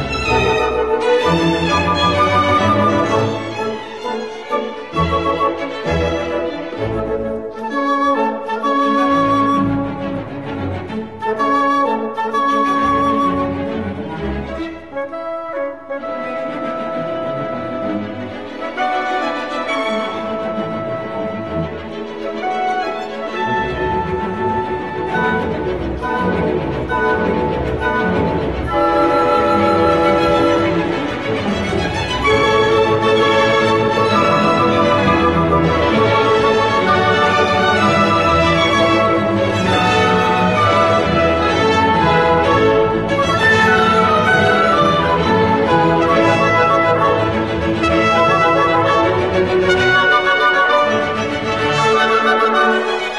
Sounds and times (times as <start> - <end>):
Music: 0.0 - 53.1.